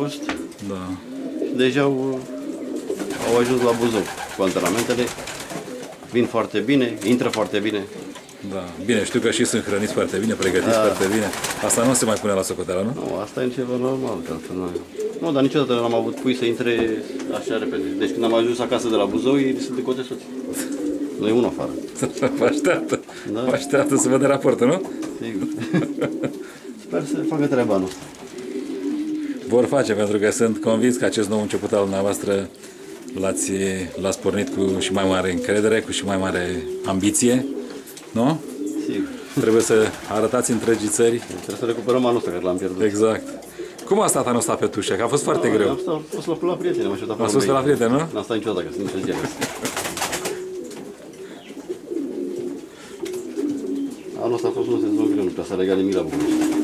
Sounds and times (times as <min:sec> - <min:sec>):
Speech: 0:00.0 - 0:01.0, 0:01.6 - 0:02.3, 0:03.1 - 0:05.2, 0:06.1 - 0:20.2, 0:21.2 - 0:21.8, 0:23.3 - 0:25.5, 0:26.9 - 0:28.0, 0:29.5 - 0:32.5, 0:33.2 - 0:37.5, 0:38.1 - 0:43.3, 0:43.9 - 0:49.5, 0:54.2 - 0:56.3
Pigeon, dove: 0:14.1 - 0:31.4, 0:48.7 - 0:56.6.